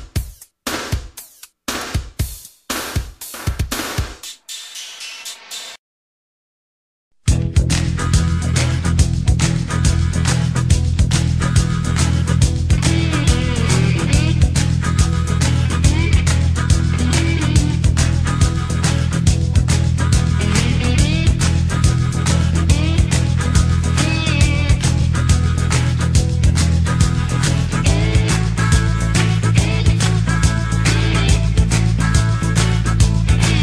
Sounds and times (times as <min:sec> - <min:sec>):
Drum machine: 0:00.0 - 0:05.8, 0:07.3 - 0:33.6.